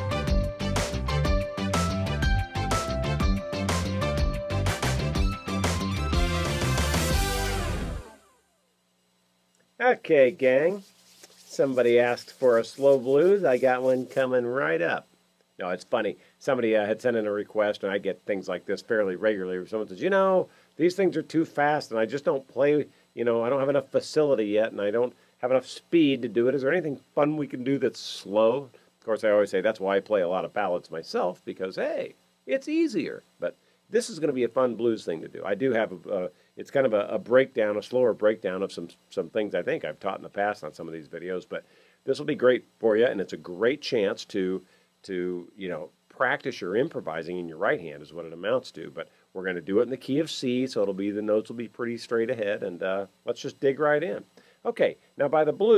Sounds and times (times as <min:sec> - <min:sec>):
Speech: 0:09.8 - 0:10.9, 0:11.5 - 0:55.7.